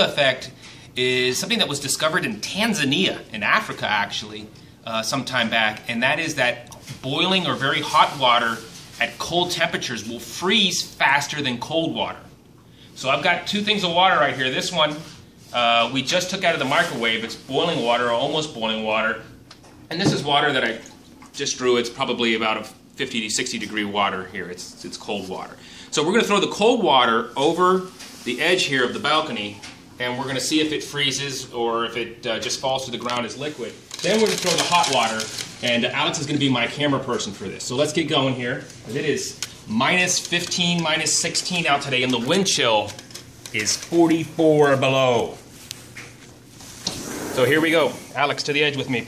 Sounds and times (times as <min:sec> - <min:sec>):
Speech: 0:00.0 - 0:12.3, 0:13.0 - 0:45.4, 0:47.4 - 0:49.0.